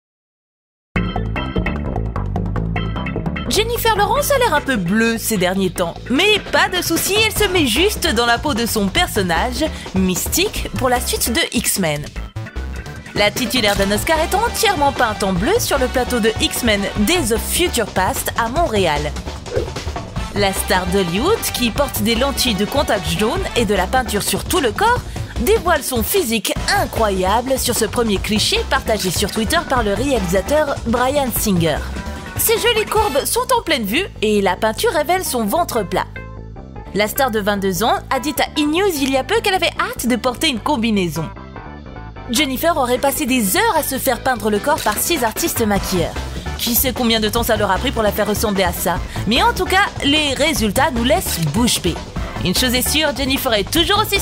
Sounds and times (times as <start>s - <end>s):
Music: 1.0s - 54.2s
Speech: 3.5s - 12.2s, 13.2s - 19.2s, 20.4s - 36.1s, 36.9s - 41.4s, 42.3s - 54.2s.